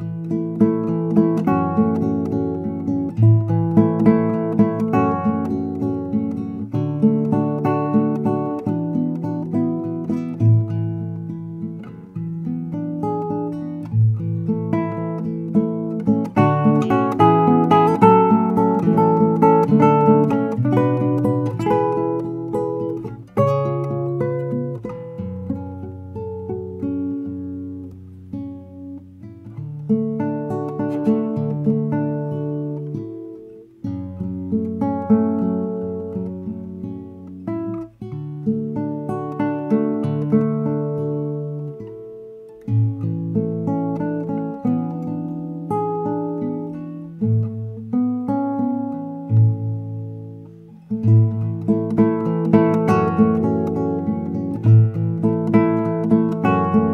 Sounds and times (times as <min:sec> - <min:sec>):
Electric guitar: 0:00.0 - 0:56.9
Strum: 0:00.0 - 0:56.9.